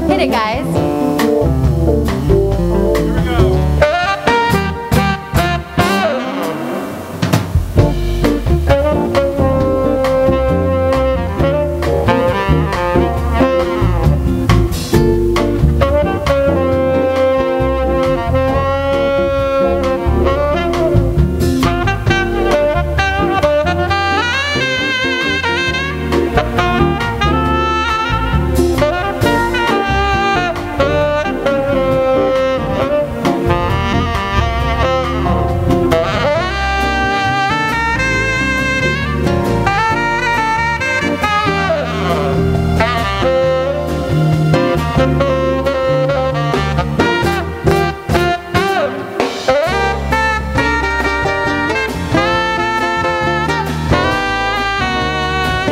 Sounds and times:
Music: 0.0s - 55.7s.

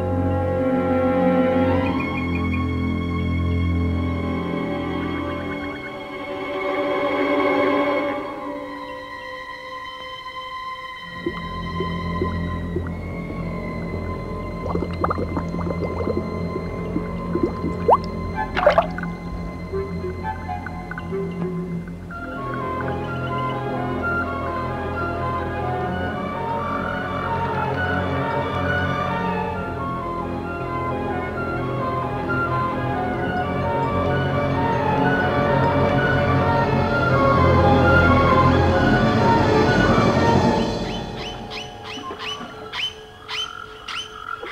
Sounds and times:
Music: 0.0s - 44.1s.

